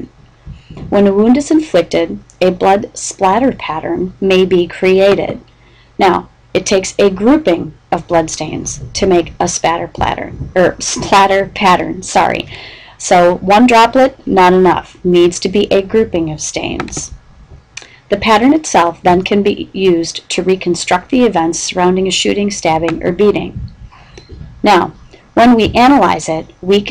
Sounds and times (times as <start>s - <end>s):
Speech: 0.8s - 5.4s, 6.0s - 17.2s, 18.1s - 23.6s, 24.6s - 26.9s.